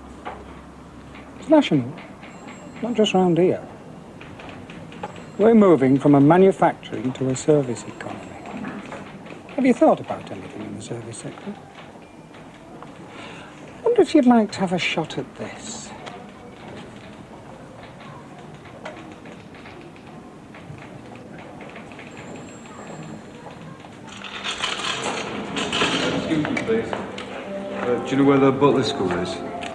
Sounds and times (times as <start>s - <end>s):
Speech: 2.8s - 3.7s, 5.4s - 8.6s, 9.6s - 11.6s, 13.8s - 18.5s, 25.9s - 27.1s, 27.8s - 29.5s.